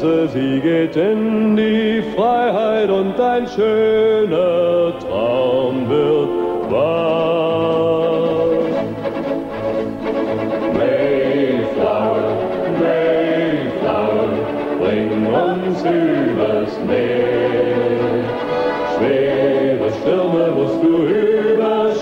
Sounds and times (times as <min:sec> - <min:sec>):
Music: 0:00.0 - 0:22.0.